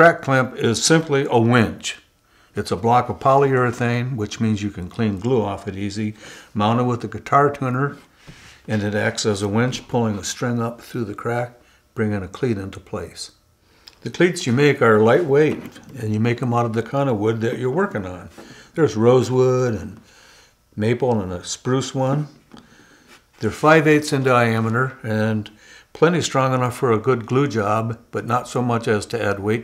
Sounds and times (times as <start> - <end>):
Speech: 0.0 - 8.1, 8.7 - 13.4, 14.0 - 20.1, 20.8 - 22.4, 23.4 - 29.6.